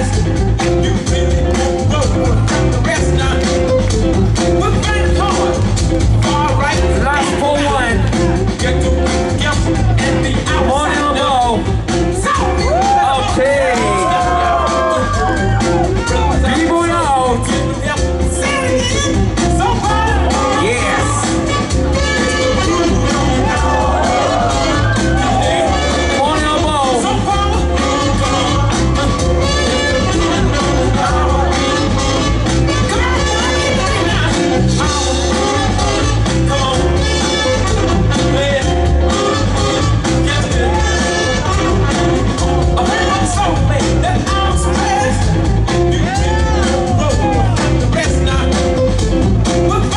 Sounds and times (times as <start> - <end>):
Music: 0.0 - 49.9.